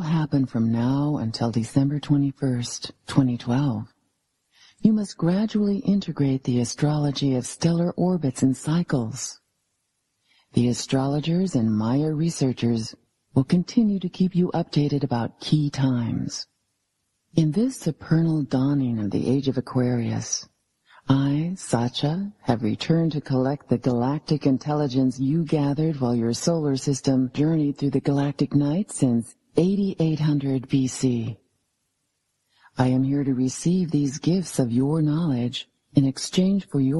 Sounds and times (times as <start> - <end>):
Speech: 0.0 - 4.0, 4.8 - 9.4, 10.5 - 16.5, 17.4 - 31.4, 32.8 - 36.9.